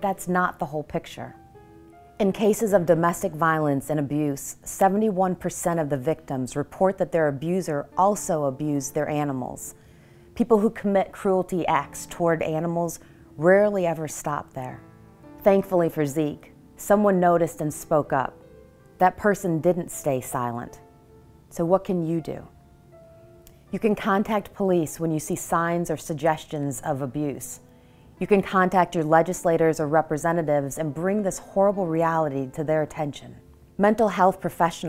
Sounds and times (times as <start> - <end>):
Speech: 0.0 - 1.4, 2.2 - 9.7, 10.4 - 14.8, 15.4 - 18.3, 19.0 - 20.8, 21.5 - 22.5, 23.7 - 27.6, 28.2 - 34.8
Music: 0.0 - 34.8.